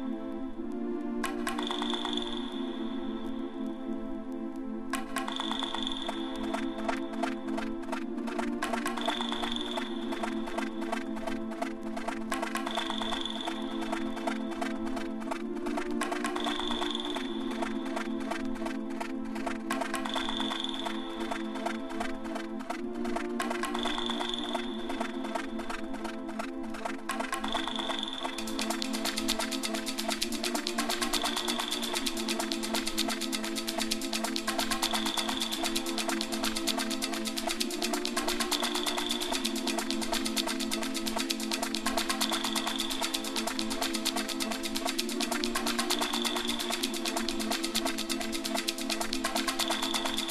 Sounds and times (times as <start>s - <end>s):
Music: 0.0s - 50.3s.